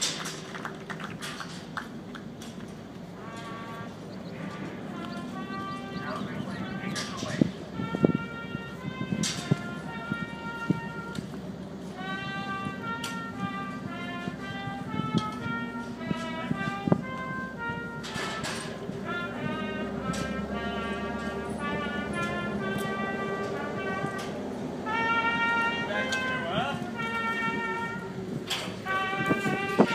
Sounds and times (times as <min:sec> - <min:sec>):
Music: 0:03.2 - 0:29.9
Speech: 0:06.0 - 0:07.6, 0:25.8 - 0:26.9.